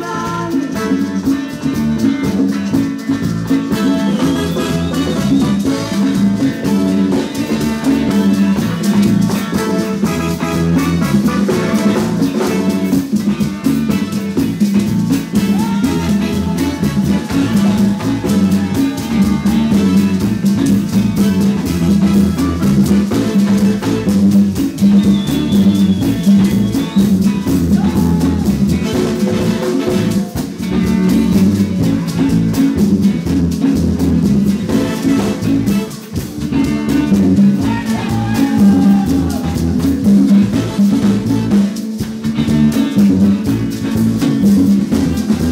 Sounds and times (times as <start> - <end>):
Music: 0.0 - 45.5.